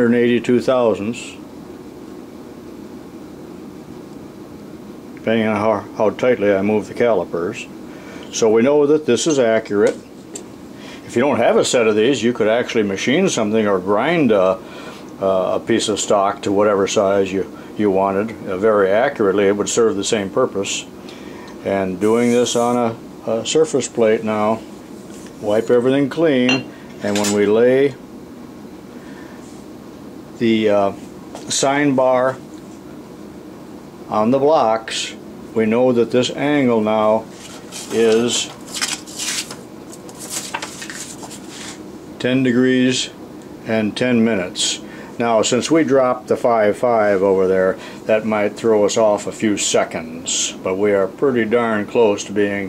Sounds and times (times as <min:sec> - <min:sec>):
Speech: 0:00.0 - 0:01.5, 0:05.2 - 0:10.1, 0:11.0 - 0:14.6, 0:15.2 - 0:20.9, 0:21.6 - 0:24.7, 0:25.4 - 0:28.0, 0:30.4 - 0:32.4, 0:34.1 - 0:37.3, 0:37.9 - 0:38.6, 0:42.2 - 0:52.6
Inside, small room: 0:00.0 - 0:52.6.